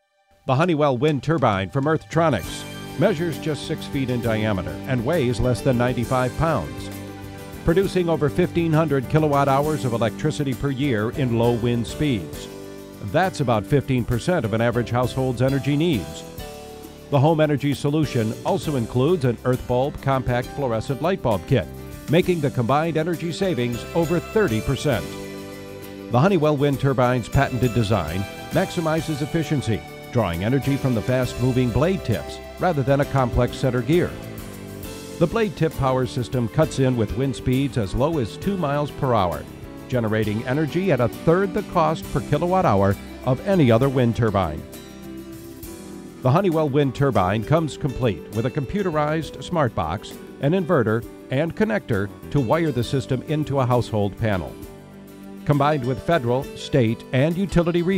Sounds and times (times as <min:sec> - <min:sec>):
Music: 0:00.0 - 0:57.9
Speech: 0:00.5 - 0:06.9, 0:07.6 - 0:16.3, 0:17.1 - 0:25.2, 0:26.1 - 0:34.2, 0:35.2 - 0:44.7, 0:46.2 - 0:54.6, 0:55.5 - 0:57.9.